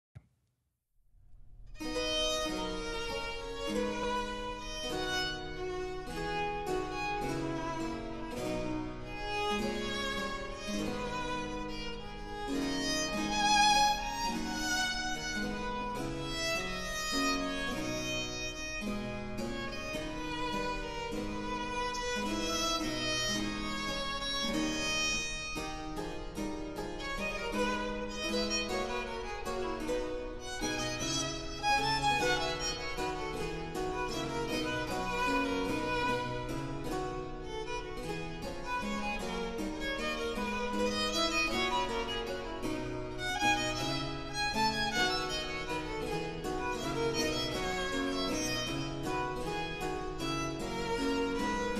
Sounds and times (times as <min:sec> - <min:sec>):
Violin, fiddle: 0:01.8 - 0:51.7.